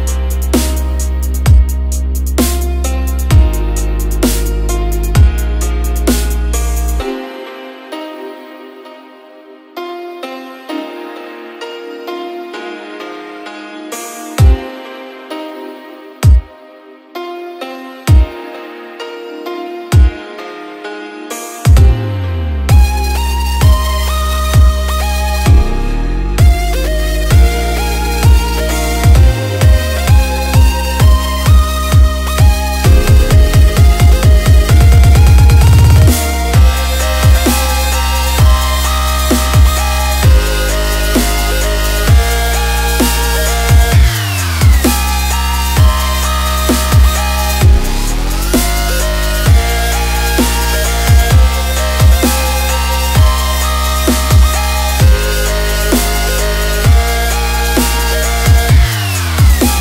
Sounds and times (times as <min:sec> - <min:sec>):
Electronic music: 0:00.0 - 0:59.8.